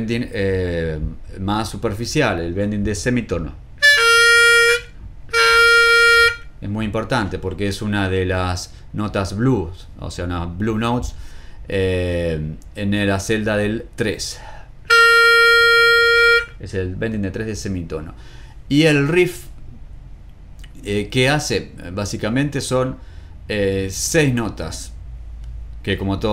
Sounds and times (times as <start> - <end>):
Speech: 0.0 - 3.6, 6.6 - 14.5, 16.6 - 19.6, 20.7 - 25.0, 25.8 - 26.3
Harmonica: 3.8 - 6.6, 14.9 - 16.6.